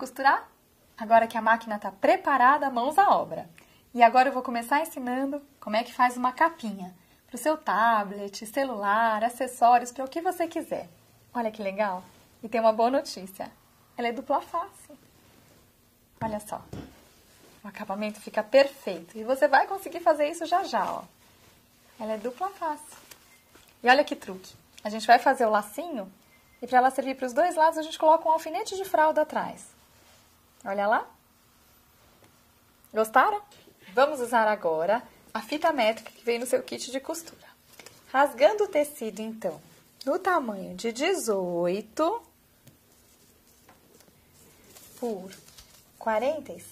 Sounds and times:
Speech: 0.0 - 15.0, 16.2 - 16.9, 17.6 - 21.1, 22.0 - 23.1, 23.8 - 29.8, 30.6 - 31.2, 32.9 - 42.3, 45.0 - 46.7.

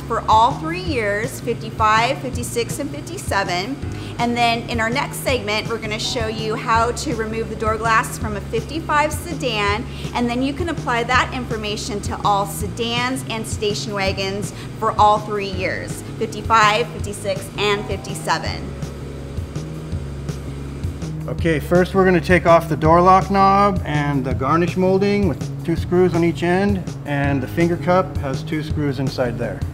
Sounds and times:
Music: 0.0 - 29.7
Speech: 0.2 - 18.6, 21.3 - 29.6.

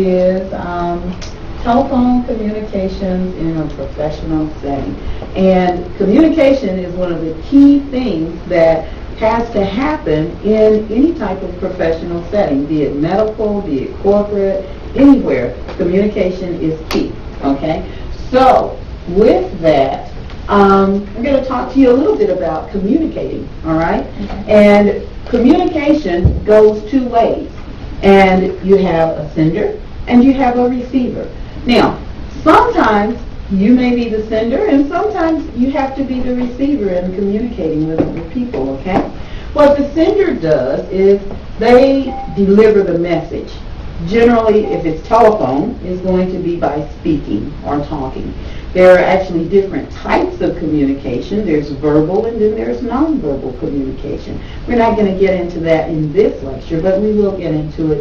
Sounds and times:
Speech: 0.0 - 58.0.

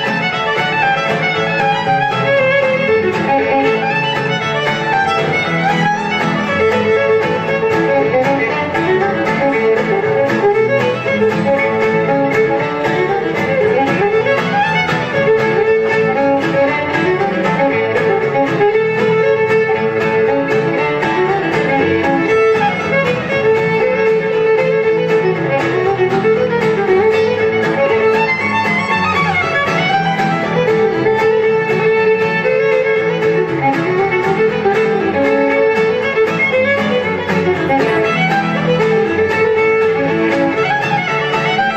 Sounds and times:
Violin, fiddle: 0.0 - 41.7.

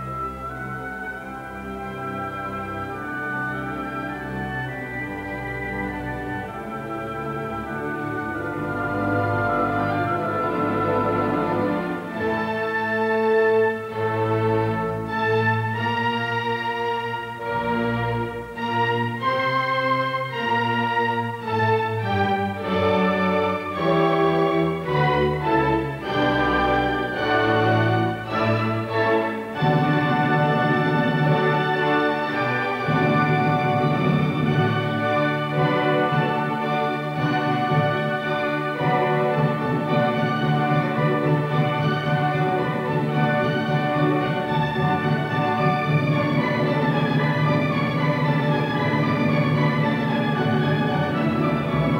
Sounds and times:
Violin, fiddle: 0.0 - 52.0.

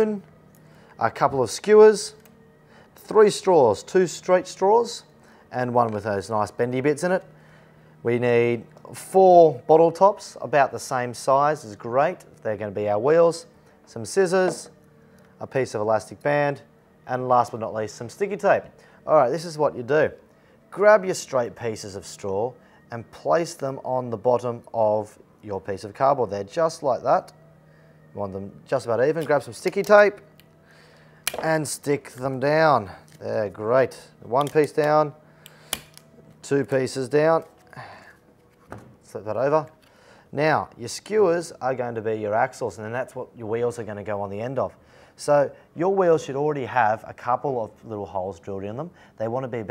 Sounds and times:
Speech: 0.0 - 0.2, 1.0 - 2.2, 3.0 - 7.2, 8.1 - 14.7, 15.4 - 20.2, 20.8 - 27.3, 28.2 - 30.2, 31.4 - 35.2, 36.4 - 37.5, 39.1 - 39.7, 40.4 - 49.7.

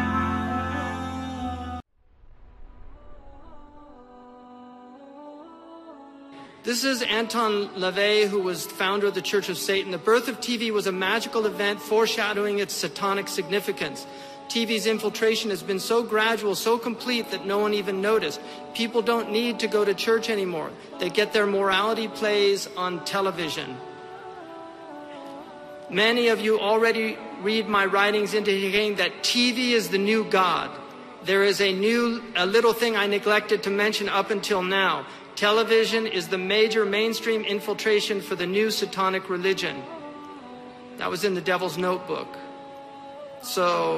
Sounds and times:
Music: 0.0 - 43.9
Speech: 6.7 - 23.8, 25.9 - 39.9, 41.0 - 42.4, 43.4 - 43.9.

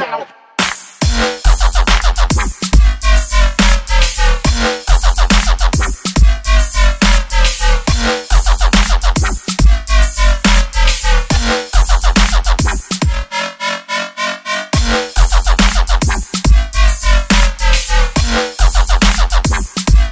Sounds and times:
Dubstep: 0.6 - 20.1.

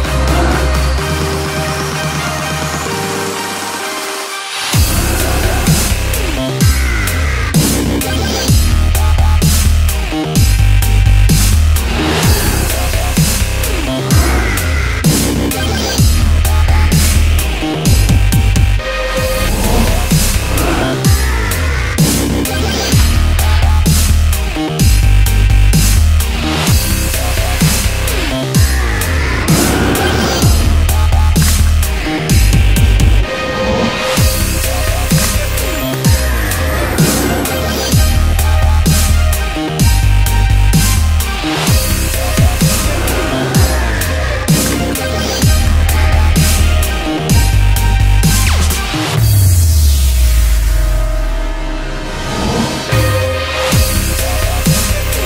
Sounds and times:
Music: 0.0 - 55.2.

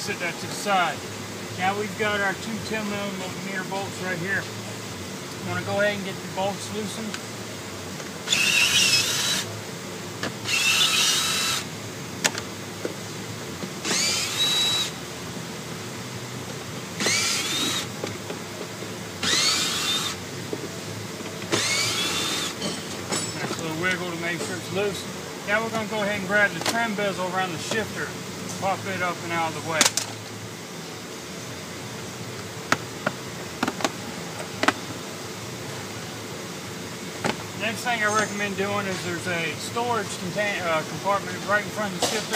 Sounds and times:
Speech: 0.0 - 1.0, 1.6 - 4.5, 5.4 - 7.2, 23.4 - 29.9, 37.6 - 42.3
Vehicle: 0.0 - 42.3.

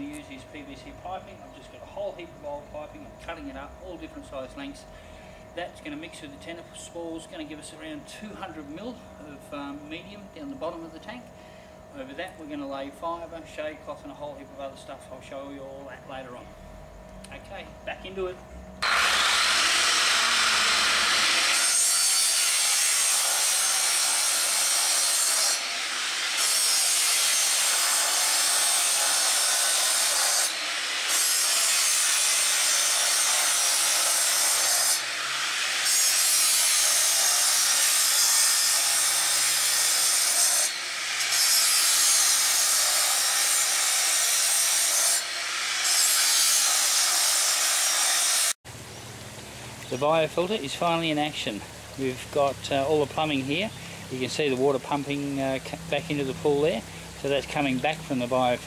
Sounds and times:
Speech: 0.0 - 4.9, 5.6 - 11.3, 12.0 - 16.5, 17.3 - 18.4, 49.9 - 58.6
Outside, urban or manmade: 0.0 - 58.6.

